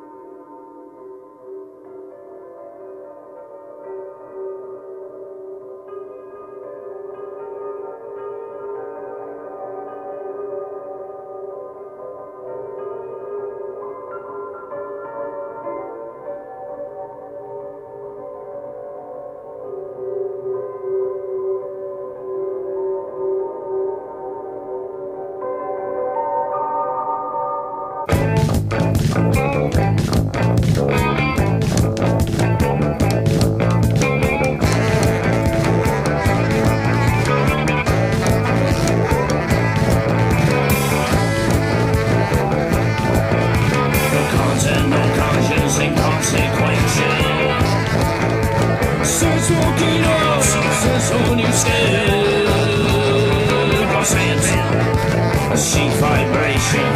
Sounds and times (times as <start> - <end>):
Music: 0.0 - 56.9.